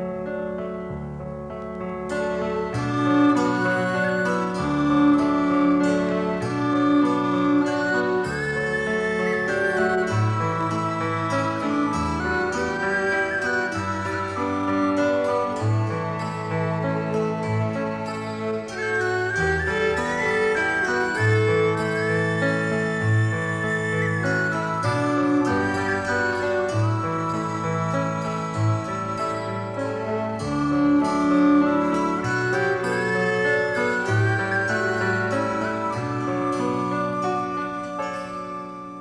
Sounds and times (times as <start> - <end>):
Music: 0.0 - 39.0.